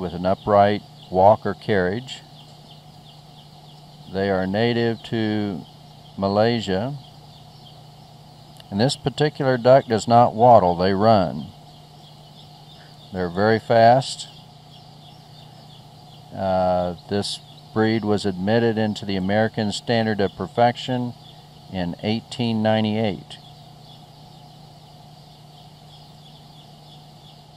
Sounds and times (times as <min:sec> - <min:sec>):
Speech: 0:00.0 - 0:02.2, 0:04.1 - 0:05.6, 0:06.2 - 0:07.0, 0:08.6 - 0:11.5, 0:13.1 - 0:14.3, 0:16.4 - 0:23.4.